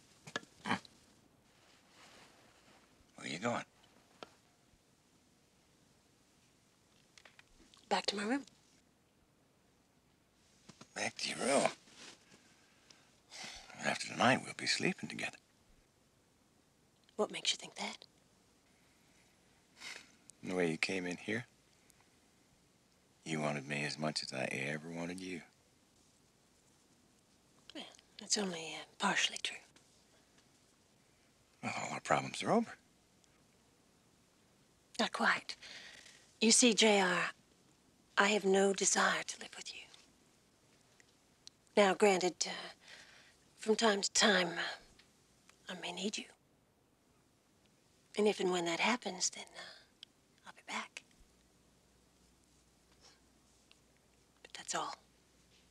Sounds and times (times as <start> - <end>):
Whispering: 17.2 - 18.0, 27.7 - 29.7, 35.0 - 35.6, 38.7 - 40.0, 43.8 - 44.9, 45.7 - 46.4, 48.8 - 51.0, 54.4 - 55.0.